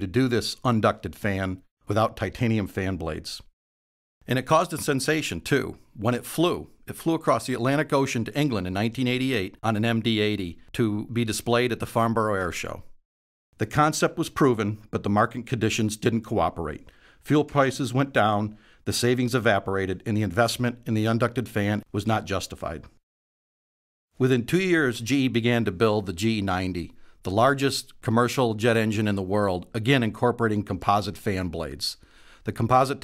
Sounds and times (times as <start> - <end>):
Speech: 0.0 - 3.5, 4.3 - 13.0, 13.6 - 23.0, 24.2 - 33.0.